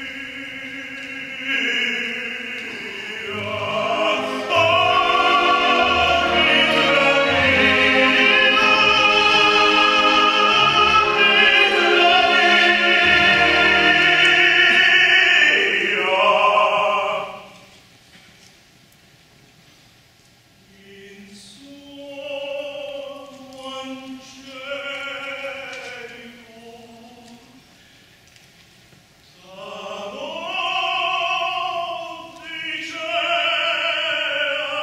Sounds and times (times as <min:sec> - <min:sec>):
Orchestra: 0:00.0 - 0:17.8, 0:20.7 - 0:27.8, 0:29.2 - 0:34.8
Opera: 0:00.0 - 0:18.1, 0:20.6 - 0:34.8.